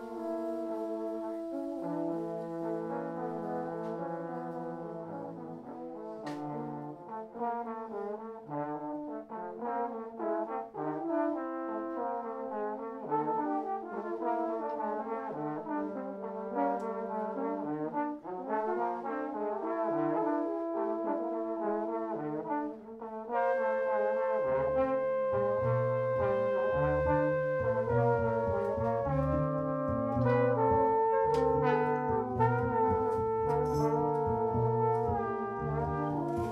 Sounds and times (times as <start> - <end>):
Jazz: 0.0 - 36.5
Orchestra: 0.0 - 36.5
Trombone: 0.0 - 36.5
Trumpet: 0.0 - 36.5.